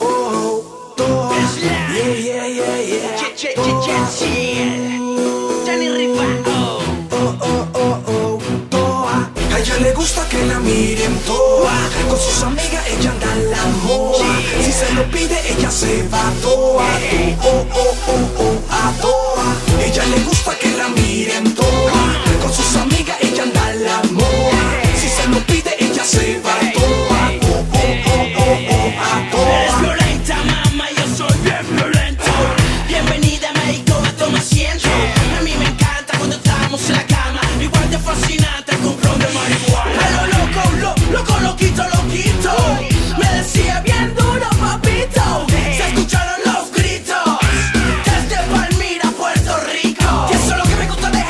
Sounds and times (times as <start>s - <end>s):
Music: 0.0s - 51.3s.